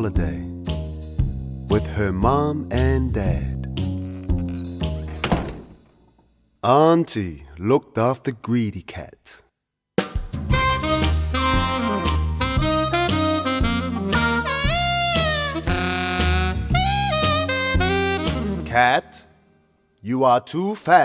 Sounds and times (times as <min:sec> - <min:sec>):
Speech: 0:00.0 - 0:00.5, 0:01.7 - 0:03.7, 0:06.6 - 0:09.5, 0:18.7 - 0:19.3, 0:20.0 - 0:21.0
Music: 0:00.0 - 0:05.6, 0:10.0 - 0:19.8.